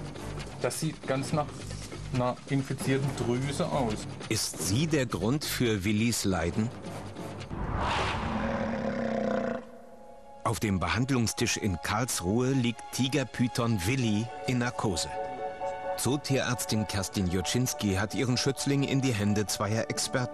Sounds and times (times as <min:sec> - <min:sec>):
Music: 0:00.0 - 0:08.3, 0:09.6 - 0:20.3
Speech: 0:00.6 - 0:01.5, 0:02.1 - 0:06.7, 0:10.5 - 0:15.2, 0:16.0 - 0:20.3
Roar: 0:08.0 - 0:09.9.